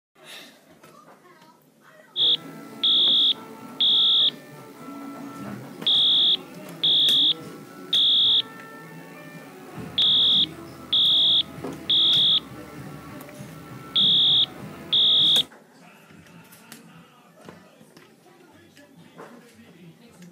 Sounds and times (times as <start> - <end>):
Fire alarm: 2.2 - 4.4, 5.8 - 8.5, 10.0 - 12.5, 13.9 - 15.5
Music: 2.2 - 20.3.